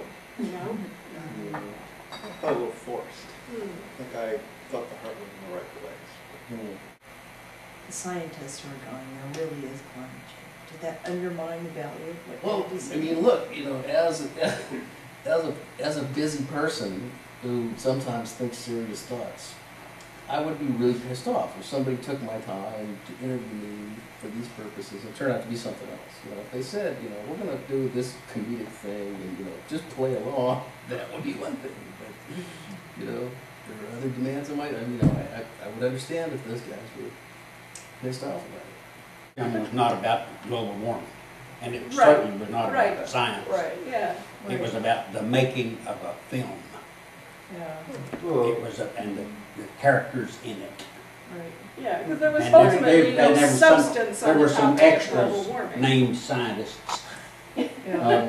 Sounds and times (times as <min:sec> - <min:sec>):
Speech: 0:00.0 - 0:06.8, 0:07.9 - 0:19.6, 0:20.3 - 0:37.1, 0:38.0 - 0:38.7, 0:39.4 - 0:46.8, 0:47.5 - 0:58.2.